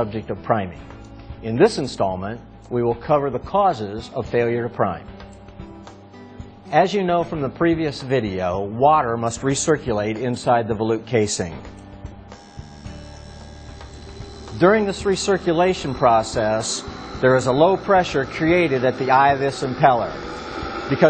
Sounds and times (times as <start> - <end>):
Speech: 0.0 - 0.8, 1.4 - 5.1, 6.7 - 11.6, 14.6 - 20.2, 20.9 - 21.1
Music: 0.0 - 21.1.